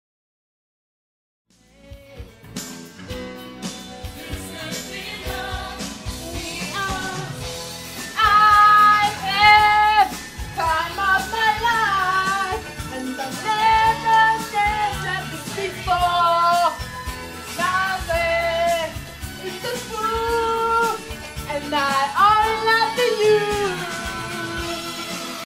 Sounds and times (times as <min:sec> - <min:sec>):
Music: 0:01.5 - 0:25.4.